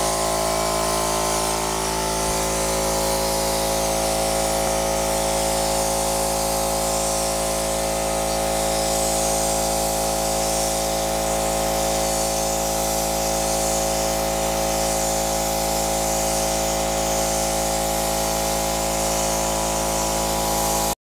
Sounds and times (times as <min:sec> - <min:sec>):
Spray: 0:00.0 - 0:21.0.